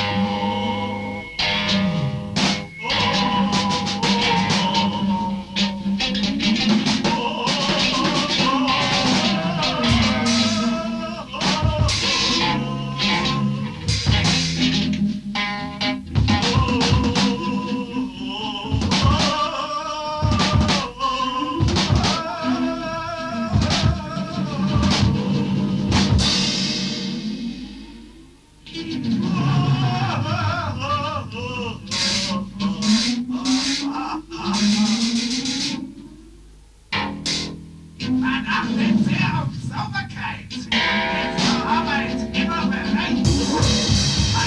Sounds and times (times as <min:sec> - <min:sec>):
Music: 0:00.0 - 0:44.4.